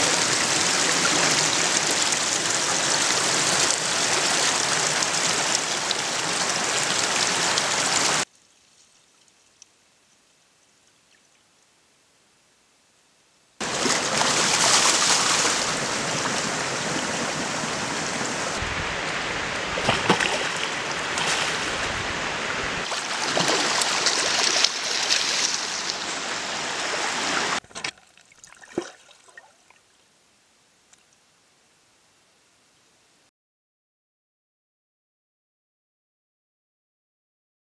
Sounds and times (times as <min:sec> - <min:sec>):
Stream: 0:00.0 - 0:09.7, 0:13.6 - 0:31.4.